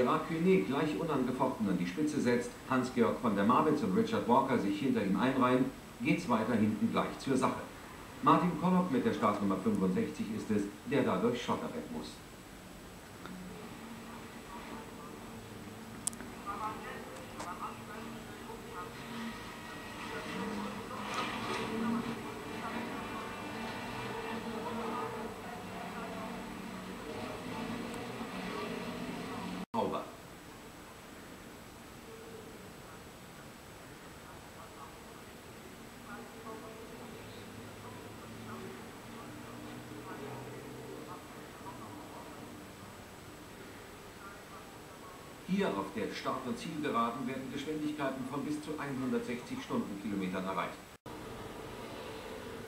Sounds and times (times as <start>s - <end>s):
Speech: 0.0s - 12.2s, 13.6s - 30.2s, 32.2s - 43.0s, 44.1s - 50.8s
Vehicle: 17.6s - 29.7s, 36.1s - 43.0s, 51.1s - 52.6s.